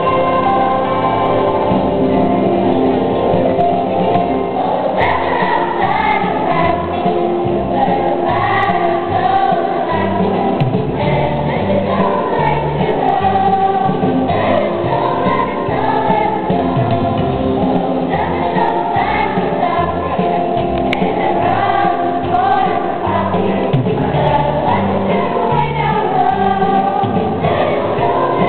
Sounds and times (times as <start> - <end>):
Choir: 0.0 - 1.8, 4.2 - 28.4.